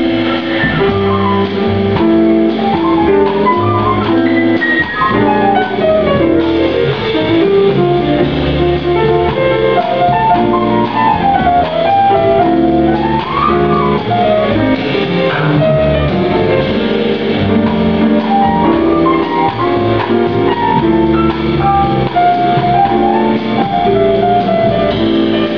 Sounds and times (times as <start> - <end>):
Inside, large room or hall: 0.0 - 25.5
Musical instrument: 0.0 - 25.5.